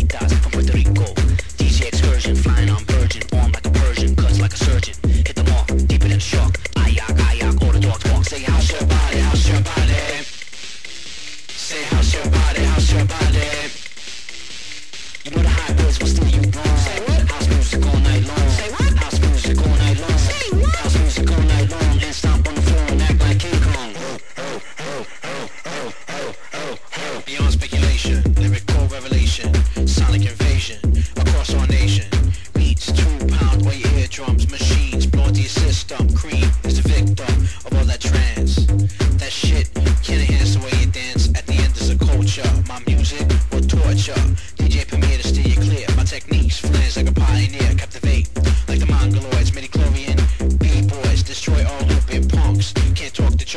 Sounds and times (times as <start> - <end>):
Electronic music: 0.0 - 53.5.